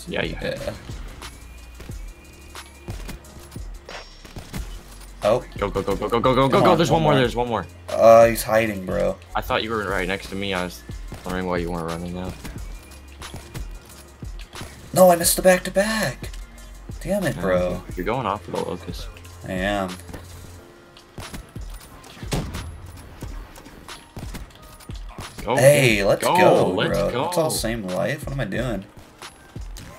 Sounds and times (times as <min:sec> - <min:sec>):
Speech: 0:00.0 - 0:00.8, 0:05.3 - 0:12.4, 0:25.4 - 0:28.9
Music: 0:00.0 - 0:29.9.